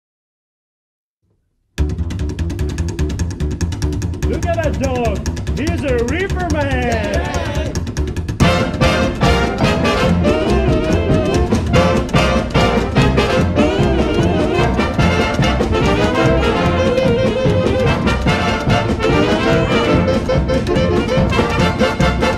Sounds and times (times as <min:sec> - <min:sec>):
Orchestra: 0:08.4 - 0:22.3.